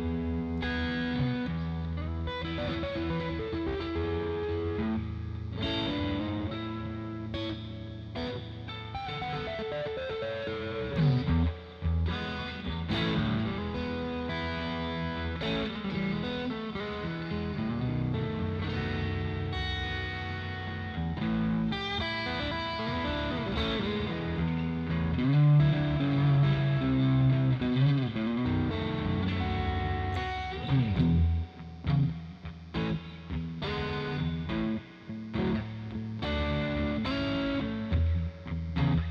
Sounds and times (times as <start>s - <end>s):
Electric guitar: 0.0s - 39.1s.